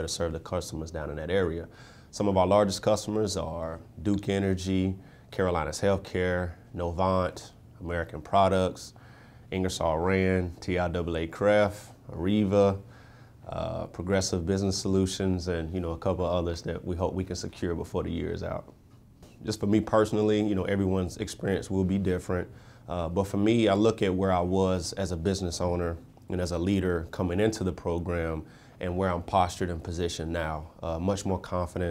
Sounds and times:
Speech: 0.0s - 18.8s, 19.4s - 31.9s.

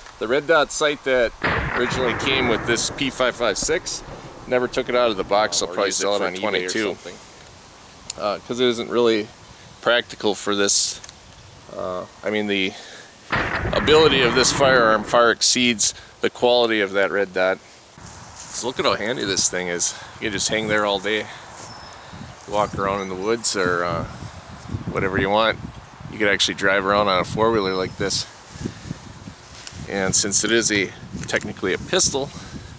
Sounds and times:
Speech: 0.2s - 7.2s, 8.1s - 11.0s, 11.7s - 13.0s, 13.6s - 17.6s, 18.5s - 21.4s, 22.4s - 24.2s, 24.9s - 28.3s, 29.9s - 32.4s.

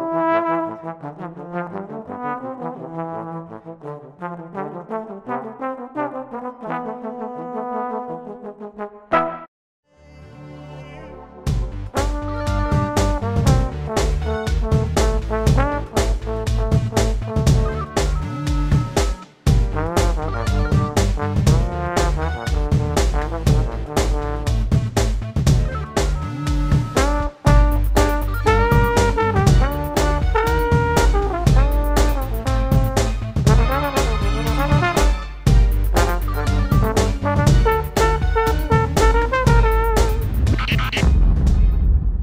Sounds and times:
Trombone: 0.0s - 9.5s, 11.8s - 17.8s, 19.6s - 24.8s, 27.0s - 40.7s.

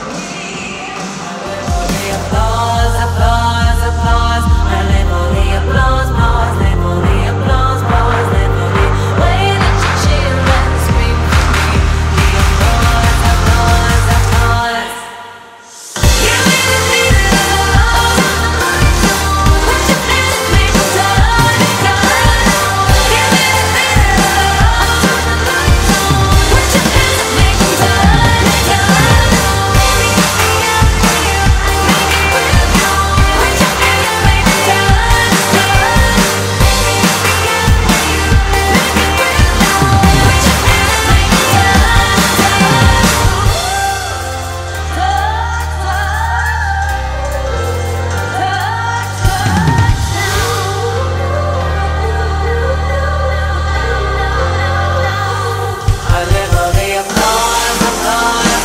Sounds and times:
Music: 0.0s - 58.6s.

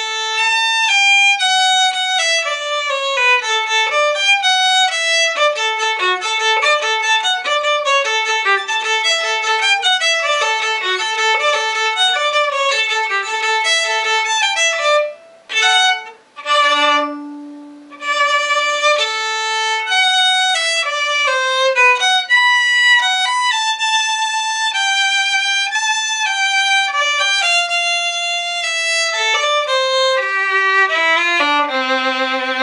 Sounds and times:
Violin, fiddle: 0.0s - 32.6s.

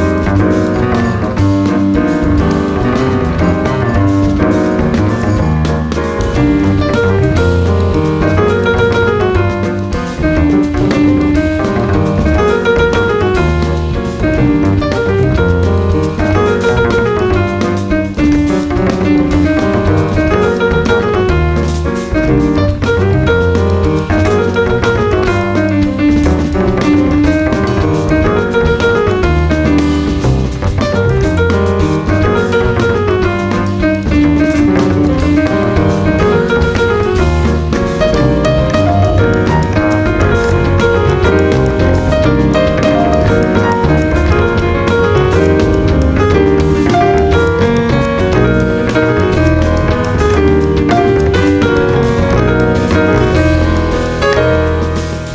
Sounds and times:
Blues: 0.0s - 55.3s.

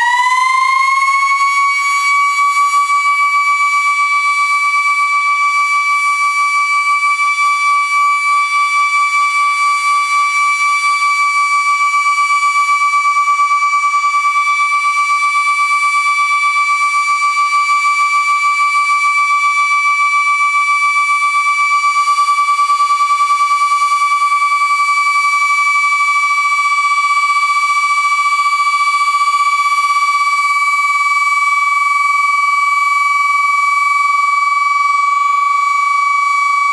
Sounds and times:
Civil defense siren: 0.0s - 36.7s.

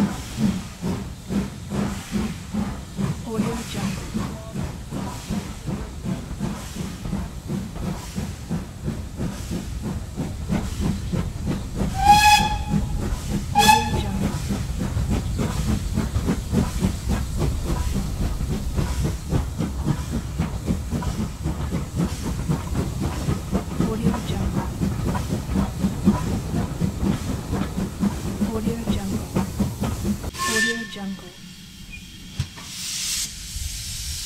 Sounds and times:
Clickety-clack: 0.0s - 30.7s
Hiss: 0.0s - 34.2s
Railroad car, train wagon: 0.0s - 34.2s
Train whistle: 12.0s - 14.3s, 30.3s - 31.4s.

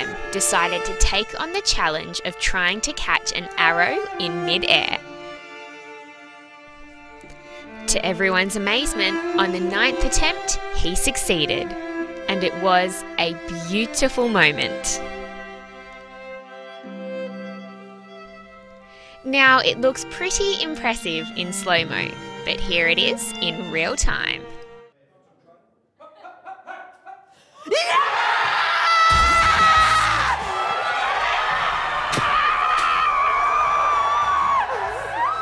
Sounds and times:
Speech: 0.0s - 5.0s, 7.9s - 15.0s, 19.3s - 26.4s
Music: 0.0s - 25.0s, 29.1s - 30.5s, 32.6s - 35.4s.

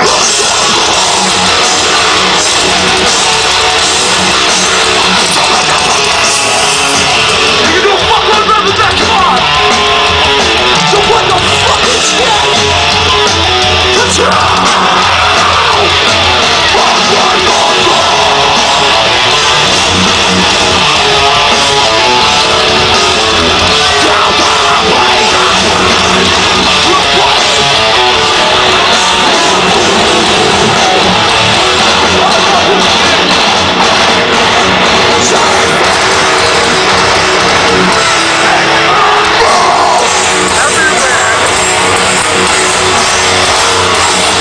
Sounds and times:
Music: 0.0s - 44.4s.

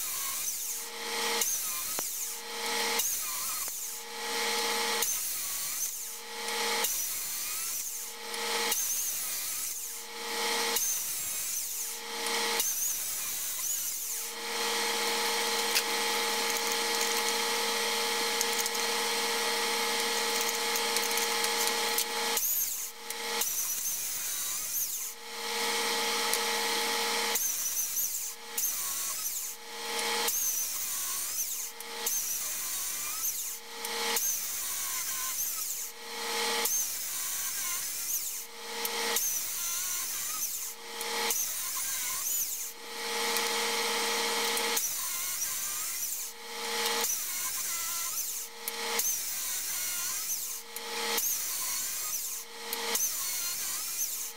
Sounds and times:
Chainsaw: 0.0s - 54.3s
Tools: 0.0s - 54.3s.

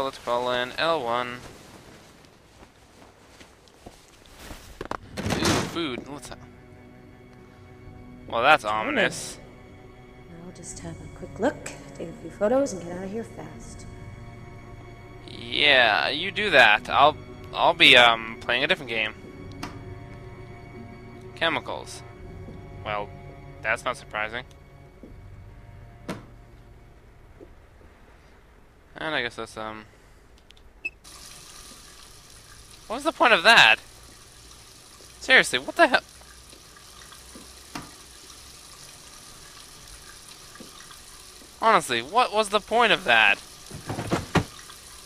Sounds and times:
Water: 31.0s - 45.0s
Water tap, faucet: 31.0s - 45.0s.

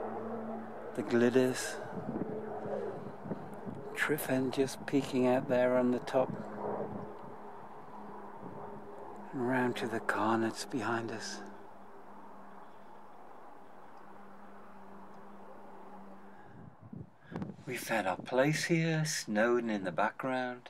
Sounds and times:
Speech: 1.0s - 1.8s, 3.9s - 6.4s, 9.3s - 11.5s, 17.7s - 20.7s.

